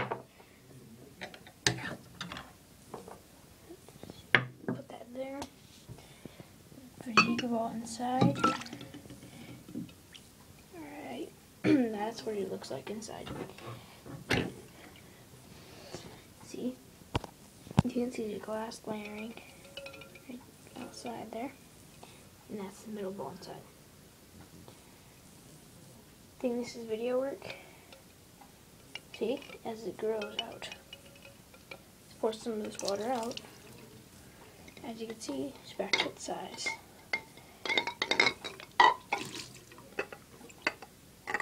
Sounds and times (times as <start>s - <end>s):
Speech: 7.0s - 8.4s, 10.8s - 13.4s, 16.4s - 16.8s, 17.8s - 19.4s, 20.8s - 21.6s, 22.5s - 23.7s, 26.4s - 27.6s, 29.2s - 30.8s, 32.2s - 33.5s, 34.8s - 36.8s.